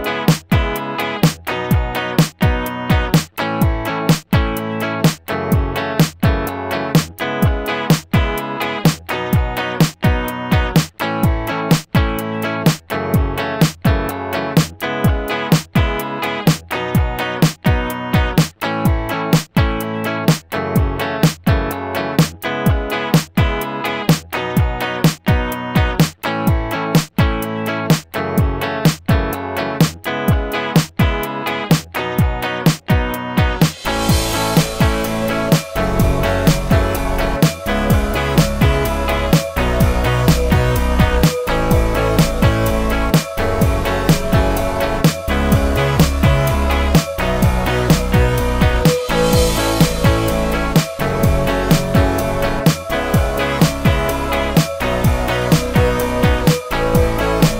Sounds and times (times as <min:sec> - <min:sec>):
Music: 0:00.0 - 0:57.5.